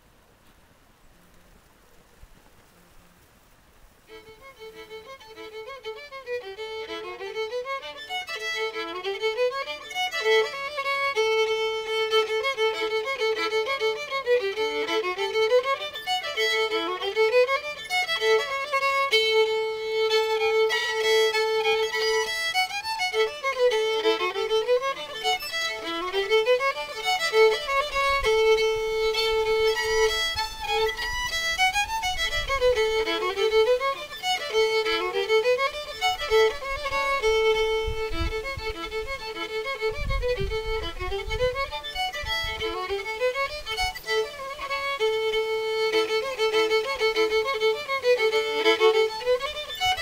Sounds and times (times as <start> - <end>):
Violin, fiddle: 3.9 - 50.0.